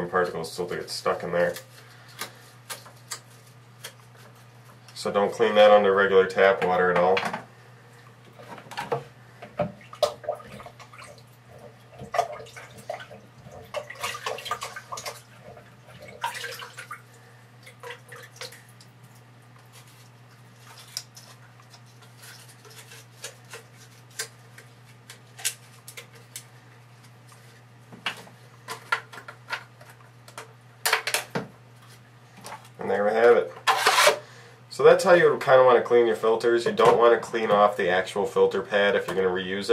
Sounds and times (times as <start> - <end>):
Inside, small room: 0.0 - 39.7.